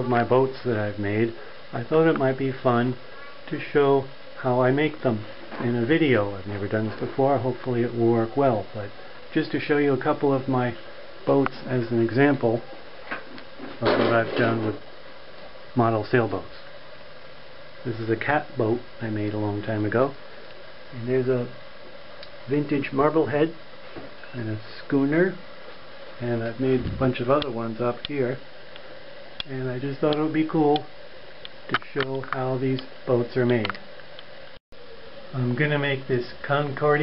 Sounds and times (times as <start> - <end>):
Speech: 0.0 - 12.7, 13.8 - 14.8, 15.8 - 16.7, 17.8 - 20.2, 20.9 - 21.6, 22.5 - 23.6, 24.2 - 25.4, 26.2 - 28.4, 29.4 - 30.9, 31.7 - 33.8, 35.3 - 37.0.